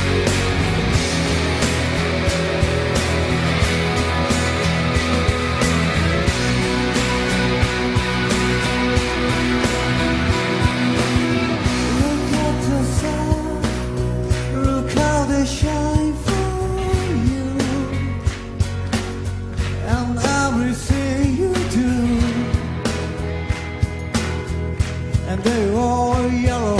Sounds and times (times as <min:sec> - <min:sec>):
Music: 0:00.0 - 0:26.7
Male singing: 0:11.8 - 0:13.8, 0:14.4 - 0:18.2, 0:19.8 - 0:22.6, 0:25.2 - 0:26.7.